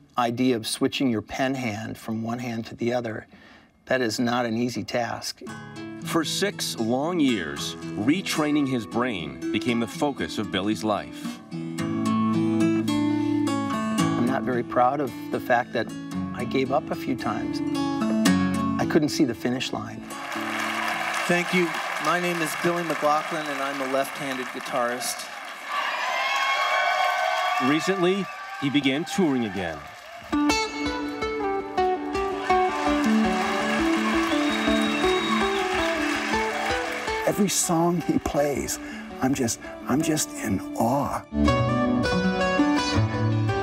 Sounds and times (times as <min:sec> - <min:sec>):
Acoustic guitar: 0:04.9 - 0:21.3, 0:30.3 - 0:43.6.